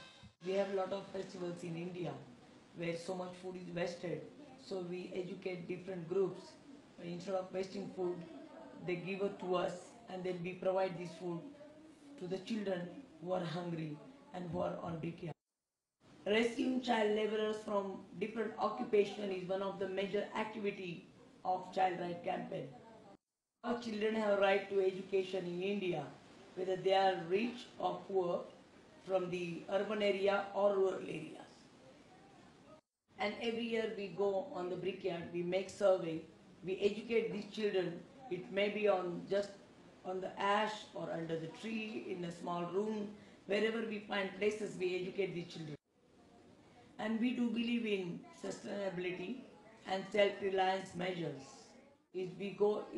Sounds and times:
Female speech, woman speaking: 0:00.4 - 0:11.6, 0:12.2 - 0:15.4, 0:16.3 - 0:31.6, 0:33.2 - 0:45.8, 0:47.0 - 0:52.9.

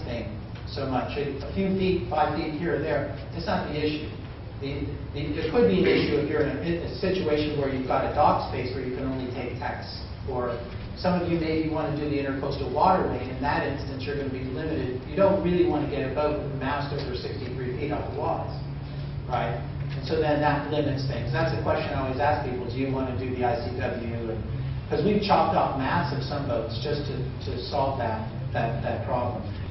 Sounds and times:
Speech: 0:00.0 - 0:18.7, 0:19.3 - 0:29.7.

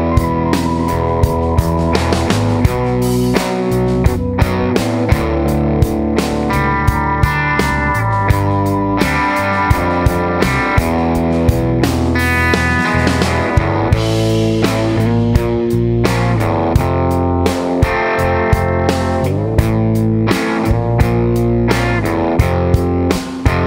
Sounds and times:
Music: 0:00.0 - 0:23.6.

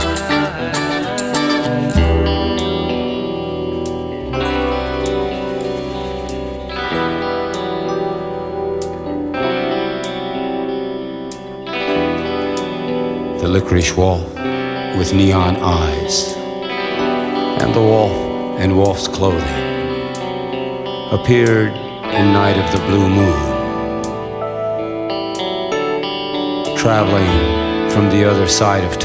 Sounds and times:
Music: 0:00.0 - 0:29.0
Speech: 0:13.4 - 0:16.4, 0:17.6 - 0:19.9, 0:21.1 - 0:23.8, 0:26.7 - 0:29.0.

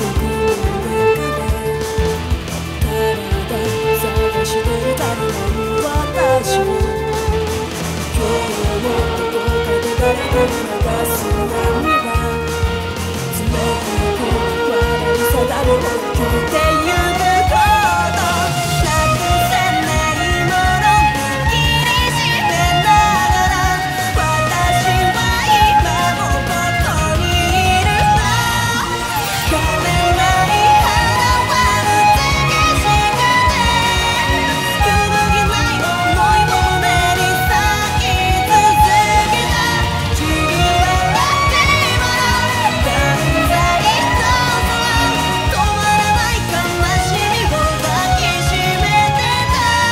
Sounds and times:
Violin, fiddle: 0:00.0 - 0:49.9.

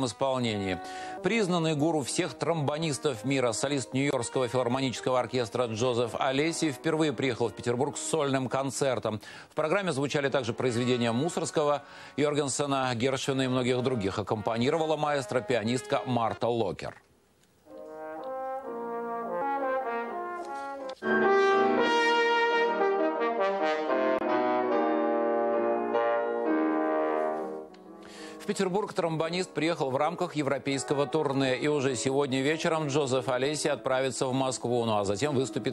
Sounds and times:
Trombone: 0:00.0 - 0:08.8, 0:13.8 - 0:16.4, 0:17.7 - 0:27.7, 0:30.6 - 0:34.1
Speech: 0:00.0 - 0:17.0, 0:28.4 - 0:35.7.

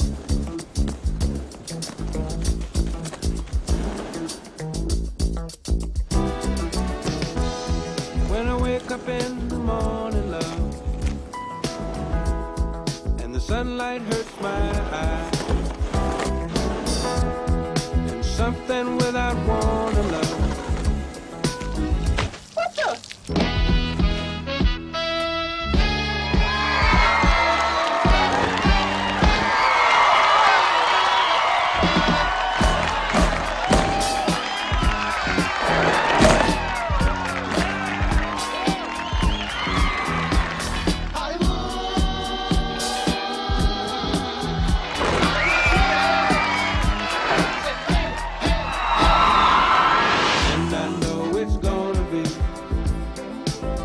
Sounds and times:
Music: 0:00.0 - 0:22.4, 0:23.2 - 0:53.8.

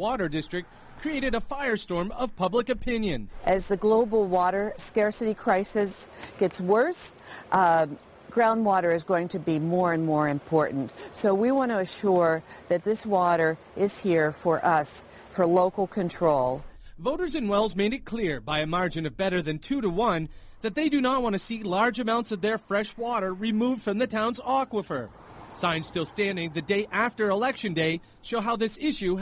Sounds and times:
Speech: 0:00.0 - 0:29.2.

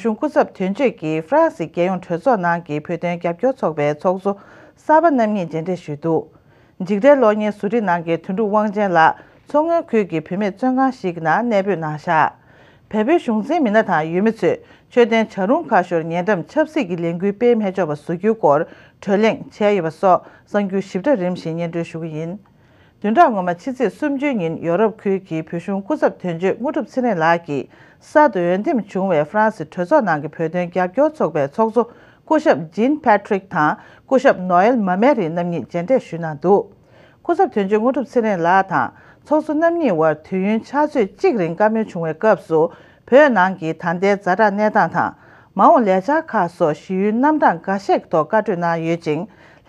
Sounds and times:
Speech: 0:00.0 - 0:22.4, 0:23.0 - 0:36.7, 0:37.3 - 0:49.3.

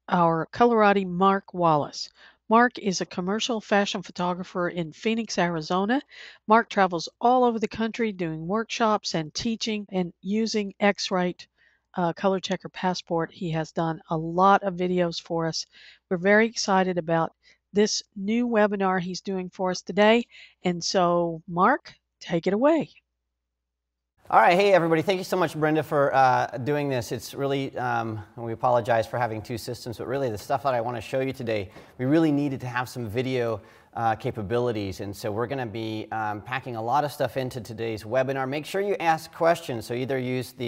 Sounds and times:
Speech: 0:00.1 - 0:11.4, 0:12.0 - 0:22.9, 0:24.3 - 0:40.6.

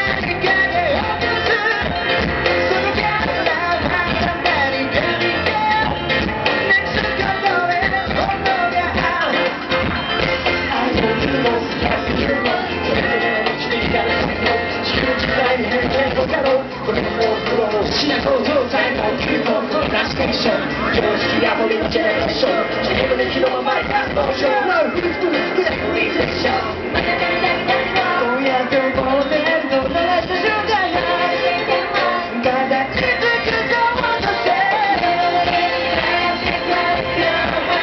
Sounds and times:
Music: 0:00.0 - 0:37.8.

